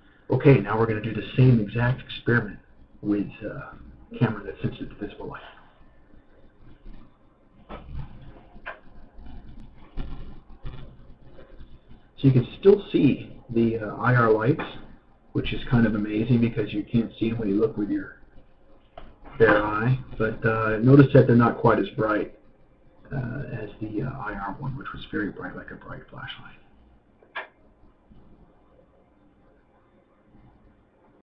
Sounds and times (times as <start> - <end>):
Speech: 0.3 - 5.6, 12.2 - 14.8, 15.4 - 18.2, 19.3 - 22.3, 23.1 - 26.6.